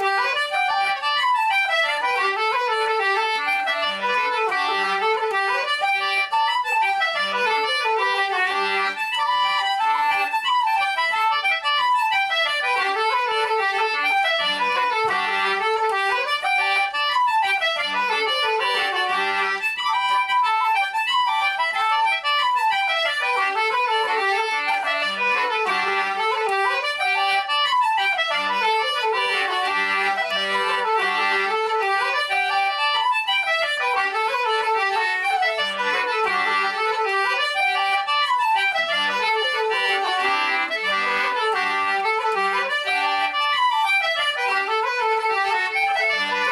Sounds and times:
Music: 0.0s - 46.5s.

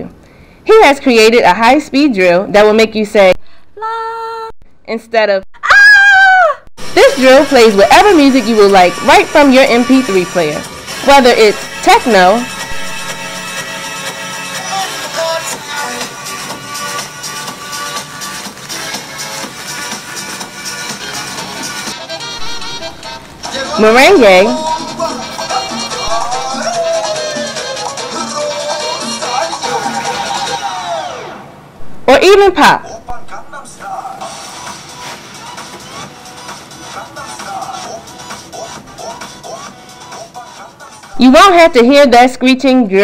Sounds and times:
Music: 6.8s - 31.5s, 33.4s - 42.0s.

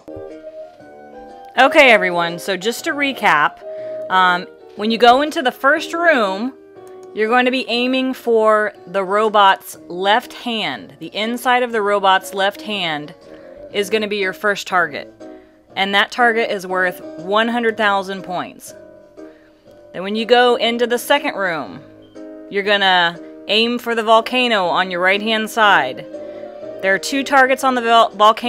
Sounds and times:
Narration, monologue: 1.3s - 28.4s.

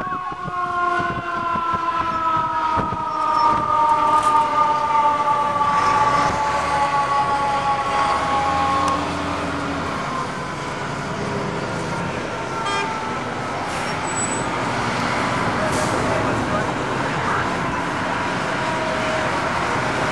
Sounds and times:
Traffic noise, roadway noise: 0.0s - 20.1s
Truck: 5.5s - 20.1s
Speech: 15.6s - 17.6s.

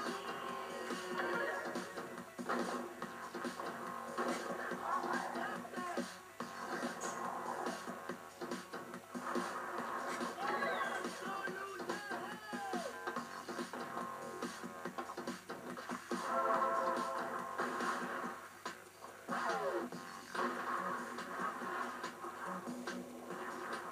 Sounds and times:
Music: 0.0s - 23.9s
Speech: 10.4s - 12.9s.

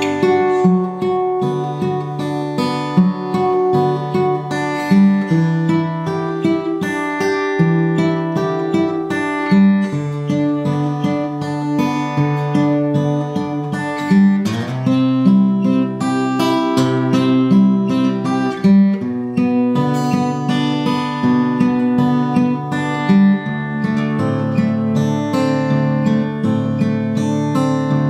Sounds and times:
Music: 0.0s - 28.1s.

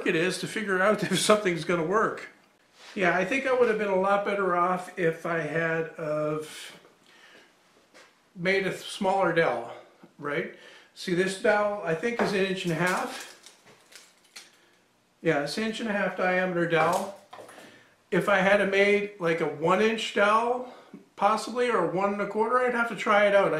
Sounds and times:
Speech: 0.0s - 2.4s, 3.0s - 6.8s, 8.4s - 13.3s, 15.2s - 17.2s, 18.1s - 23.5s
Inside, small room: 0.0s - 23.5s.

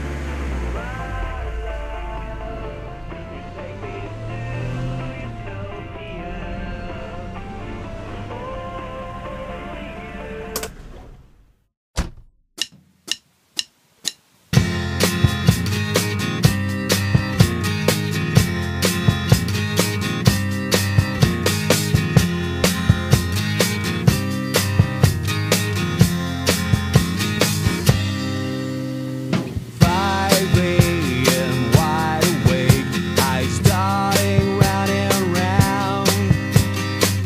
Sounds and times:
Progressive rock: 14.6s - 37.2s.

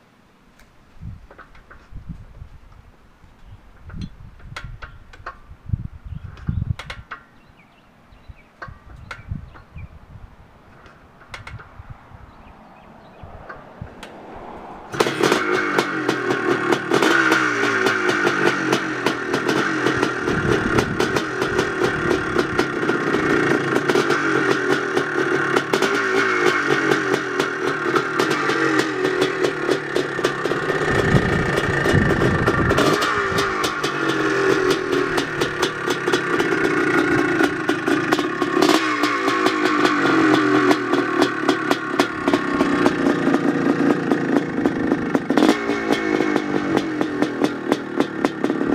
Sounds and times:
Motorcycle: 1.1s - 48.7s.

